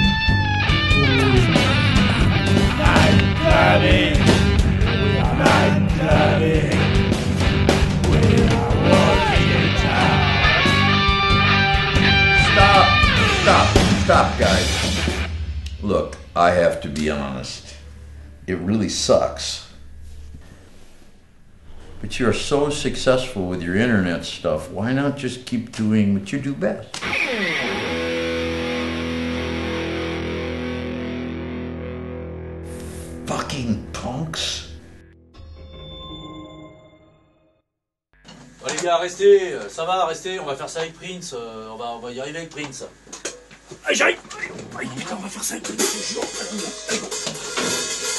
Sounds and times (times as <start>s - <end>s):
Music: 0.0s - 24.6s, 27.0s - 38.7s, 45.3s - 48.1s
Speech: 12.5s - 14.8s, 15.8s - 17.8s, 18.5s - 19.8s, 22.0s - 26.9s, 33.3s - 34.7s, 38.6s - 43.0s, 43.8s - 47.1s.